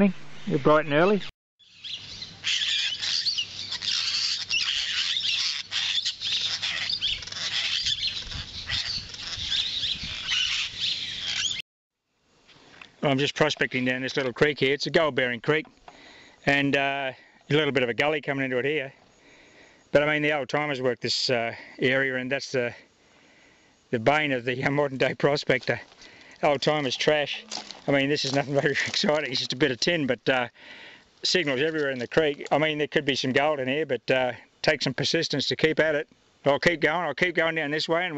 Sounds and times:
Animal: 0:02.4 - 0:11.6.

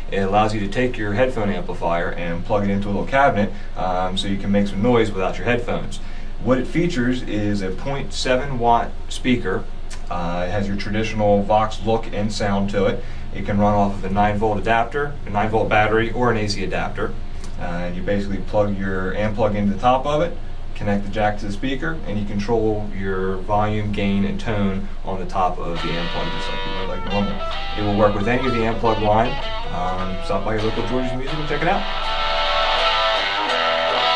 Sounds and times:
Speech: 0:00.0 - 0:31.9.

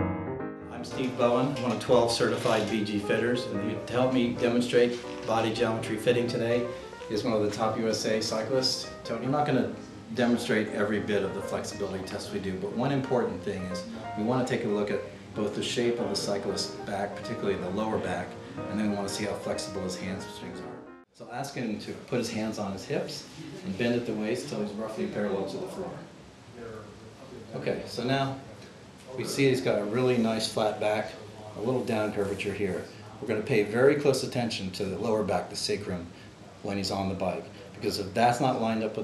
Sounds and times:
Music: 0:00.0 - 0:21.1
Speech: 0:00.8 - 0:39.0.

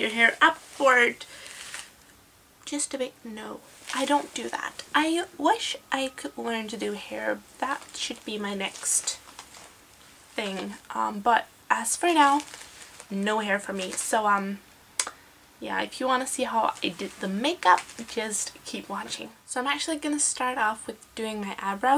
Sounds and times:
Speech: 0:00.0 - 0:01.2, 0:02.6 - 0:09.2, 0:10.4 - 0:12.5, 0:13.1 - 0:21.9.

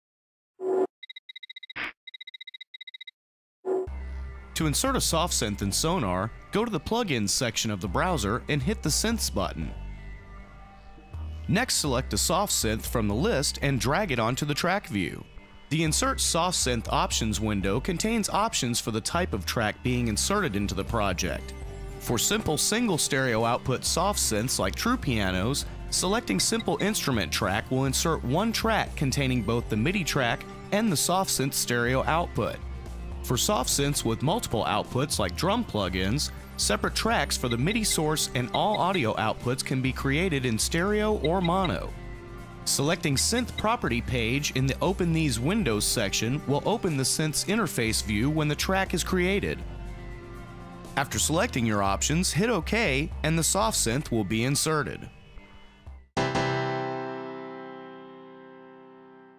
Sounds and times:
Music: 0:03.9 - 0:59.3
Speech: 0:04.6 - 0:09.8, 0:11.5 - 0:32.6, 0:33.3 - 0:41.9, 0:42.7 - 0:49.6, 0:51.0 - 0:55.1.

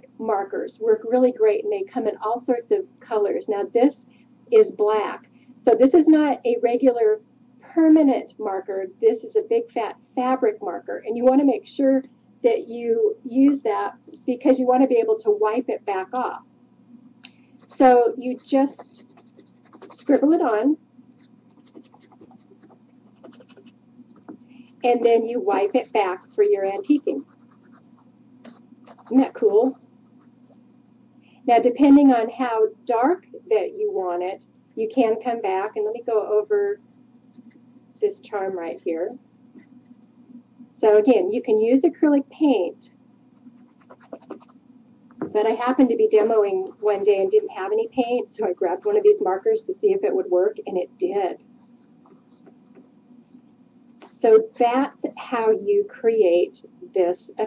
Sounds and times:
Speech: 0:00.0 - 0:16.5, 0:17.7 - 0:19.2, 0:19.8 - 0:20.8, 0:24.8 - 0:27.3, 0:28.9 - 0:29.8, 0:31.5 - 0:36.8, 0:38.0 - 0:39.2, 0:40.8 - 0:42.9, 0:45.2 - 0:51.4, 0:54.0 - 0:57.4
Inside, small room: 0:00.0 - 0:57.4.

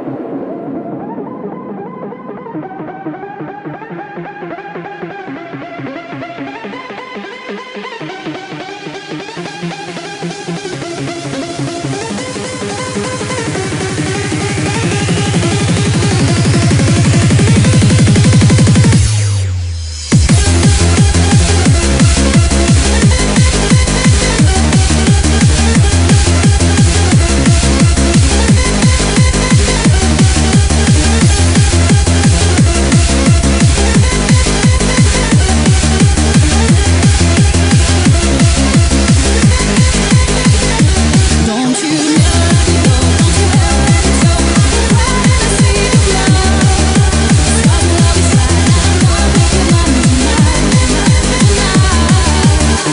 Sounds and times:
Techno: 0:00.0 - 0:52.9.

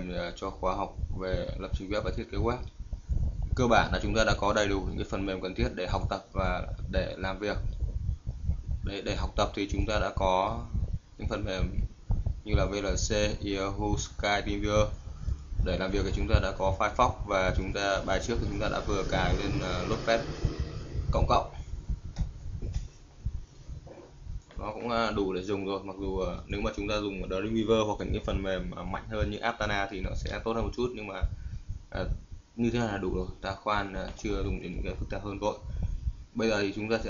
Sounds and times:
Speech: 0:00.0 - 0:02.7, 0:03.5 - 0:07.8, 0:08.8 - 0:15.0, 0:15.6 - 0:21.6, 0:24.5 - 0:35.8, 0:36.4 - 0:37.1.

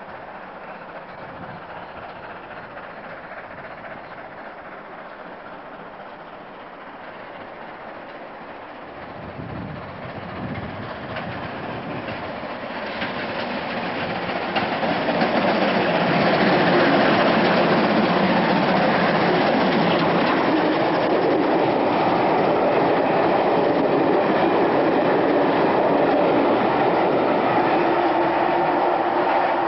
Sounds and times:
Railroad car, train wagon: 0:00.0 - 0:29.6
Train: 0:00.0 - 0:29.6.

